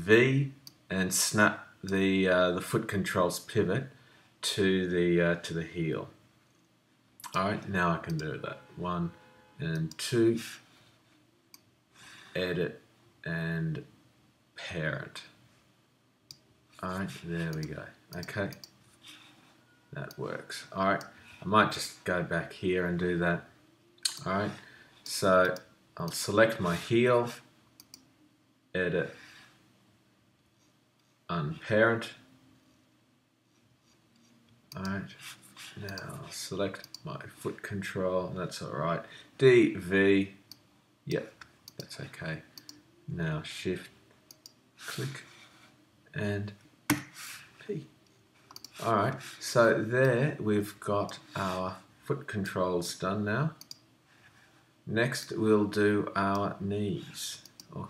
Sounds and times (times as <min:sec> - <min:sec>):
Speech: 0:00.0 - 0:06.2, 0:07.3 - 0:10.6, 0:12.4 - 0:13.9, 0:14.6 - 0:15.4, 0:16.8 - 0:18.6, 0:20.0 - 0:23.5, 0:24.1 - 0:27.5, 0:28.8 - 0:29.2, 0:31.3 - 0:32.2, 0:34.8 - 0:35.2, 0:35.8 - 0:40.4, 0:41.1 - 0:42.5, 0:43.1 - 0:43.9, 0:44.9 - 0:45.3, 0:46.1 - 0:46.6, 0:47.6 - 0:47.9, 0:48.8 - 0:53.6, 0:54.9 - 0:57.9
Clicking: 0:27.8 - 0:28.1, 0:36.8 - 0:37.0, 0:41.7 - 0:41.9, 0:42.6 - 0:42.8, 0:44.3 - 0:44.6, 0:48.5 - 0:48.7, 0:53.6 - 0:53.8.